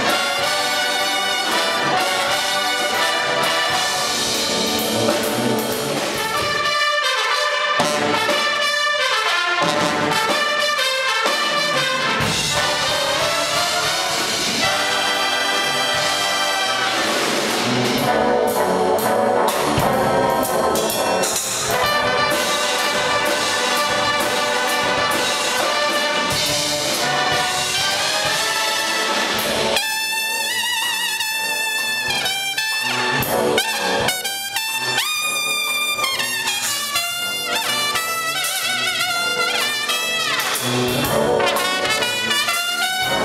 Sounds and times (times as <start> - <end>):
Music: 0.0 - 43.2.